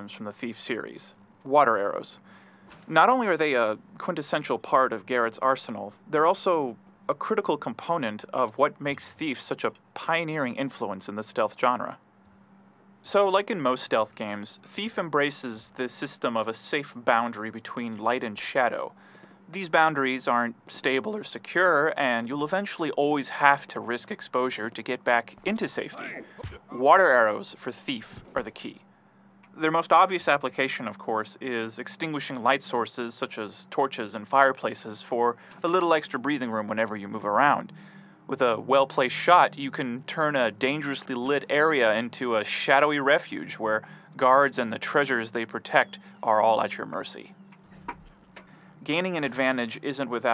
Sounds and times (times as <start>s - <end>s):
Speech: 0.0s - 2.2s, 2.9s - 12.0s, 13.0s - 28.8s, 29.6s - 47.3s, 48.8s - 50.3s.